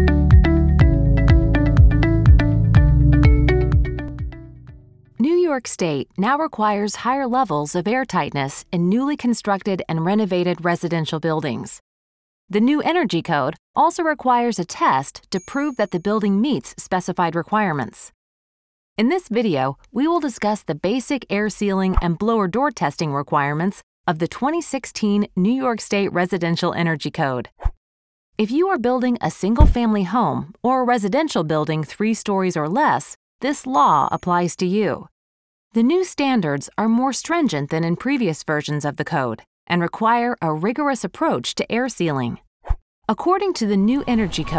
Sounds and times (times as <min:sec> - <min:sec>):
Speech: 0:05.2 - 0:11.8, 0:12.5 - 0:18.2, 0:19.0 - 0:27.5, 0:28.4 - 0:35.1, 0:35.8 - 0:42.4, 0:43.1 - 0:44.5.